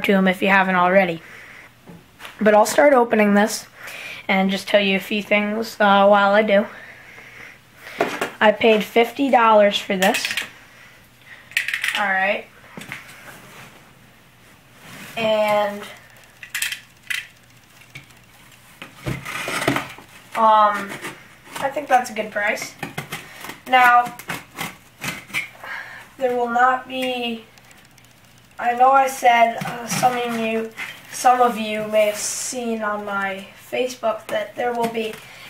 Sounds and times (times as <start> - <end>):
Speech: 0.0 - 1.2, 2.4 - 3.7, 4.3 - 6.7, 8.4 - 10.4, 11.9 - 12.5, 15.2 - 16.0, 20.4 - 21.0, 21.6 - 22.8, 23.7 - 24.2, 26.2 - 27.5, 28.6 - 35.2.